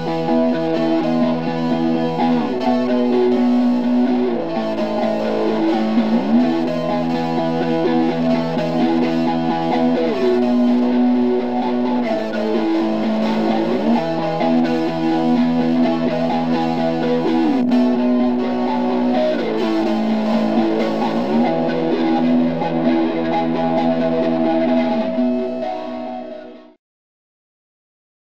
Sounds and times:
Music: 0.0s - 26.8s.

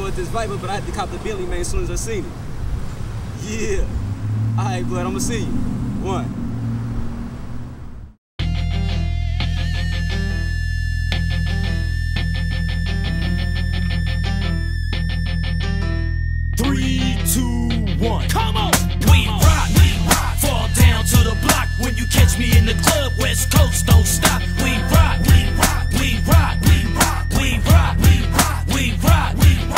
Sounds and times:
Speech: 0.0s - 2.3s, 3.4s - 3.9s, 4.6s - 6.3s
Music: 8.4s - 29.7s.

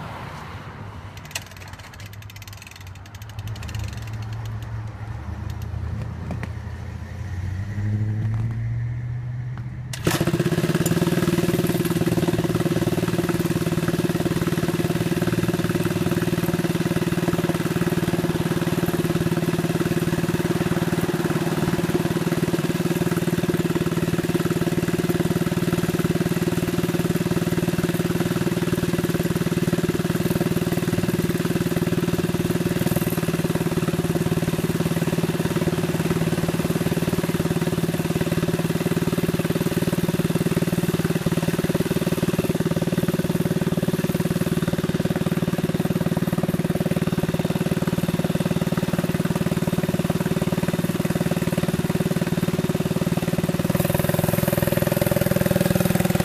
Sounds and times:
Vehicle: 0.0s - 56.2s.

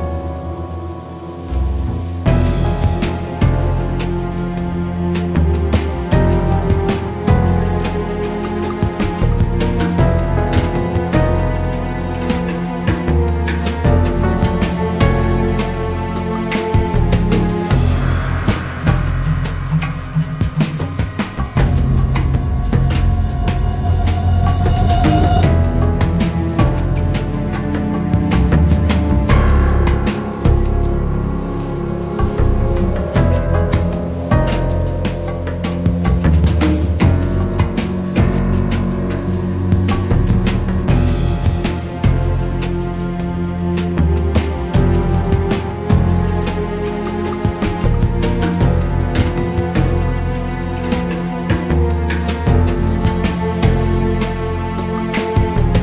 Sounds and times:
Music: 0.0s - 55.8s.

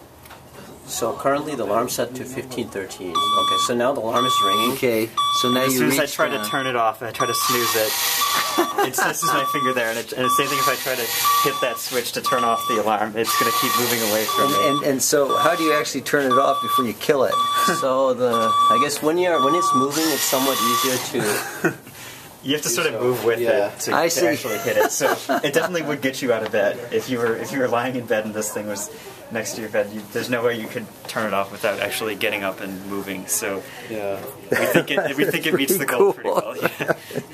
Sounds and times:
Speech: 0.9s - 7.9s, 8.9s - 21.2s, 22.5s - 36.8s
Alarm clock: 3.2s - 21.0s.

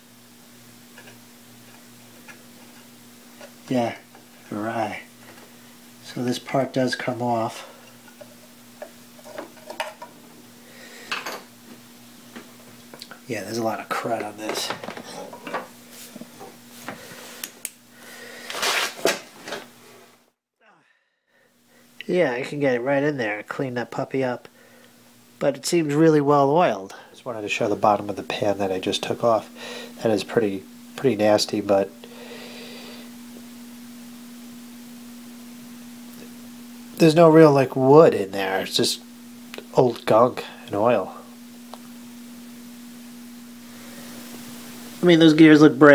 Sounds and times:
Speech: 3.7s - 5.1s, 6.0s - 7.7s, 13.2s - 14.8s, 22.0s - 24.5s, 25.4s - 32.0s, 37.0s - 39.0s, 39.6s - 41.3s, 45.0s - 45.9s.

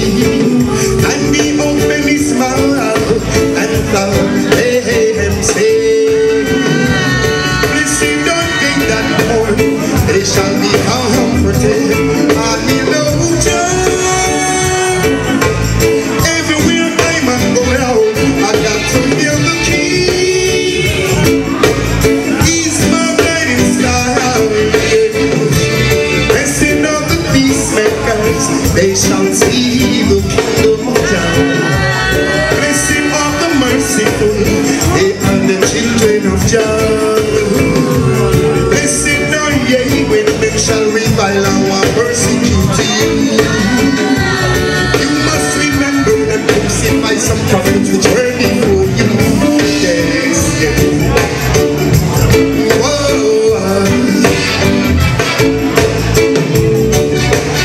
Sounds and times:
Music: 0.0s - 57.6s.

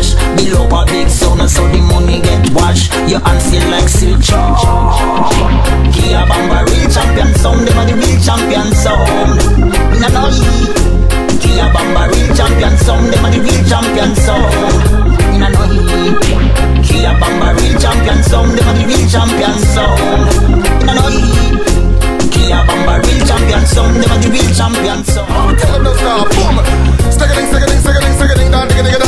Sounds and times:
Music: 0.0s - 29.0s
Sound effect: 4.4s - 6.3s.

